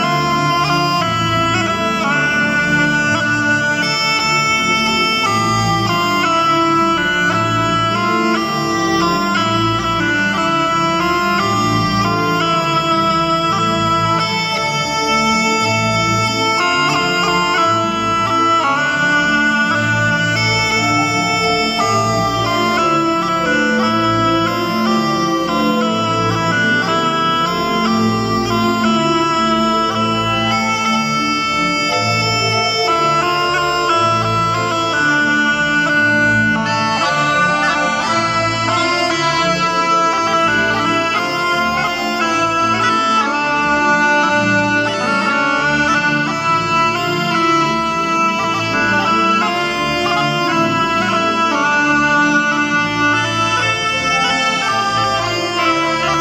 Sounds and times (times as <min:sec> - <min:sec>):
Bagpipes: 0:00.0 - 0:56.2
Wind instrument, woodwind instrument: 0:00.0 - 0:56.2.